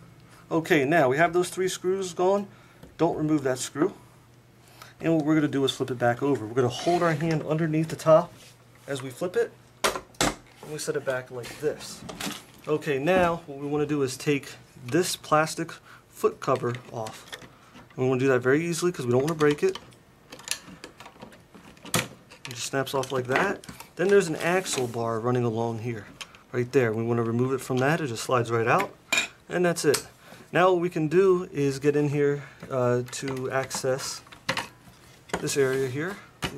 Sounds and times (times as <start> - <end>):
Speech: 0.5 - 4.0, 5.0 - 9.6, 10.6 - 12.1, 12.7 - 17.3, 18.0 - 19.8, 22.5 - 34.3, 35.4 - 36.5.